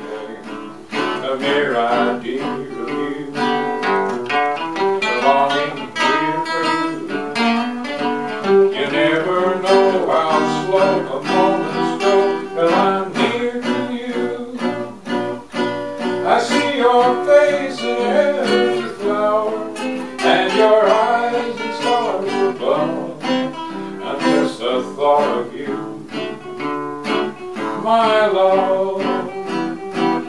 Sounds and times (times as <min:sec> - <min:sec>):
Guitar: 0:00.0 - 0:30.2.